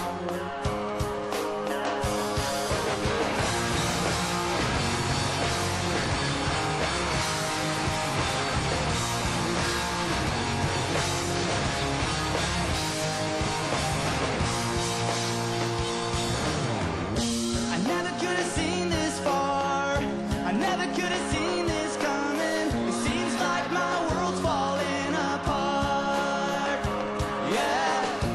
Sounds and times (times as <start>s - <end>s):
Dance music: 0.0s - 28.3s
Pop music: 0.0s - 28.3s.